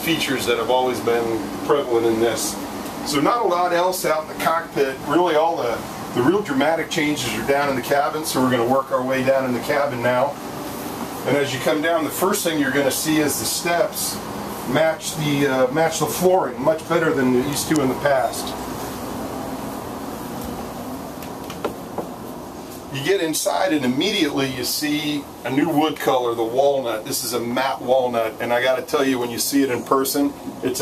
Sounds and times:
Speech: 0:00.0 - 0:10.4, 0:11.2 - 0:18.6, 0:22.9 - 0:30.8.

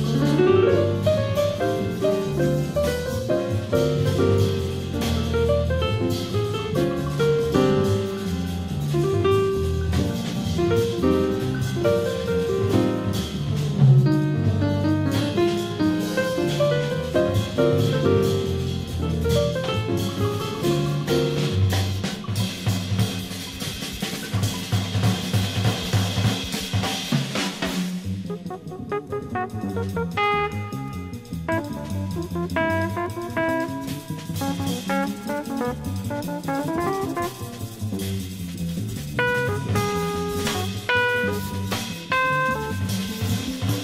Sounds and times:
Music: 0:00.0 - 0:43.8.

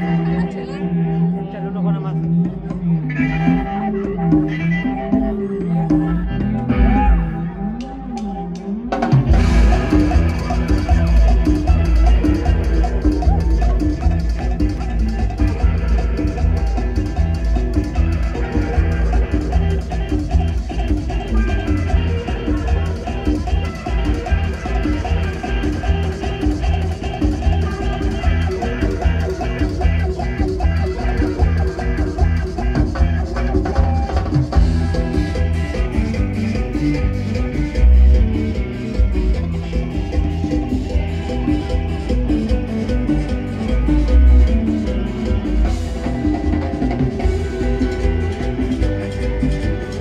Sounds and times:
Rhythm and blues: 0:02.3 - 0:50.0.

